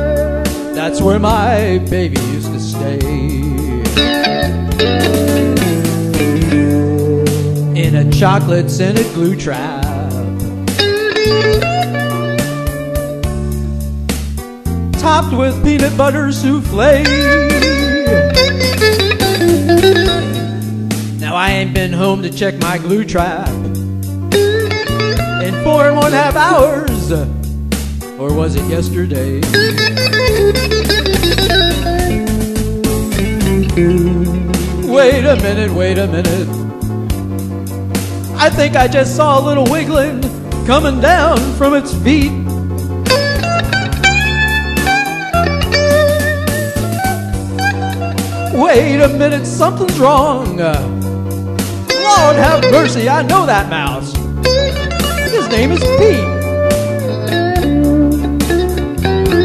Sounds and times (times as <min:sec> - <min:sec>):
Music: 0:00.0 - 0:59.4.